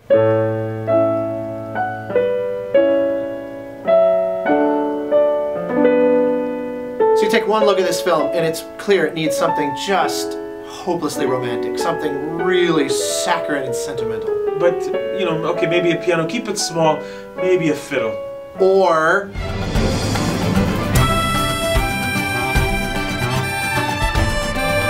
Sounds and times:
Music: 0:00.0 - 0:24.9
Speech: 0:07.2 - 0:19.4.

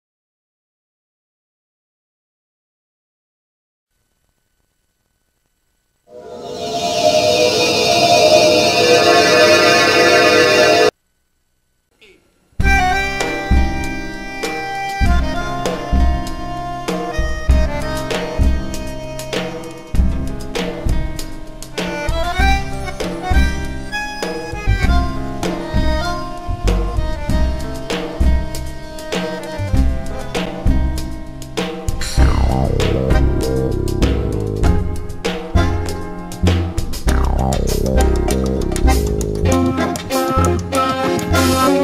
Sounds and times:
Music: 0:06.1 - 0:10.9, 0:12.6 - 0:41.8.

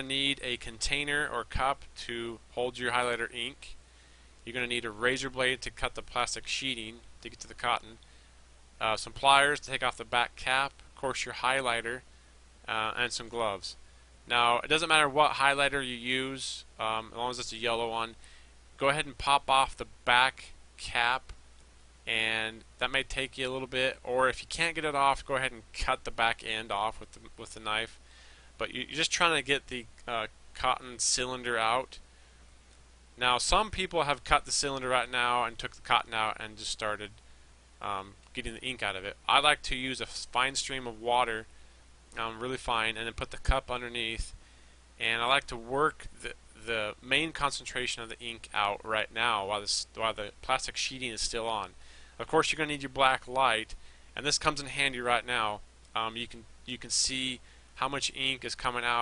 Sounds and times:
Speech: 0:00.0 - 0:03.8, 0:04.4 - 0:08.0, 0:08.8 - 0:12.1, 0:12.7 - 0:18.2, 0:18.8 - 0:21.4, 0:22.1 - 0:28.0, 0:28.6 - 0:32.0, 0:33.2 - 0:37.2, 0:37.8 - 0:41.5, 0:42.2 - 0:44.4, 0:45.0 - 0:59.0.

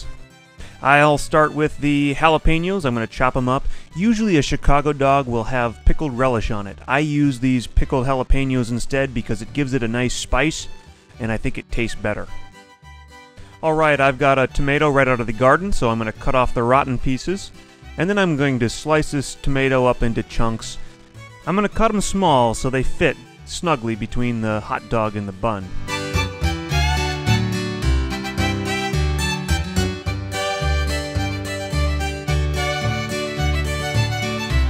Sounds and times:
Music: 0:00.0 - 0:34.7
Speech: 0:00.8 - 0:12.4, 0:13.6 - 0:20.8, 0:21.5 - 0:25.7.

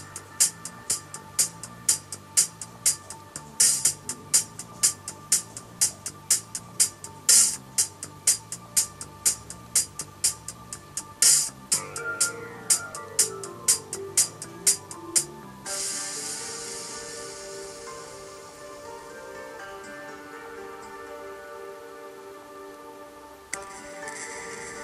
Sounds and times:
Music: 0:00.0 - 0:24.8.

